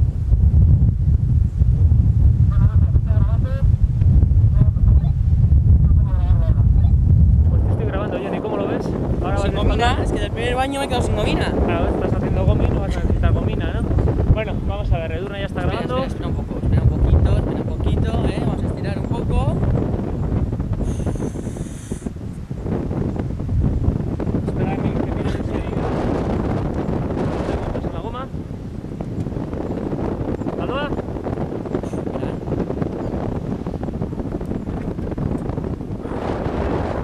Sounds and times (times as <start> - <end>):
Speech: 2.6 - 3.6, 5.9 - 6.9, 7.5 - 19.6, 27.8 - 28.3, 30.6 - 30.9.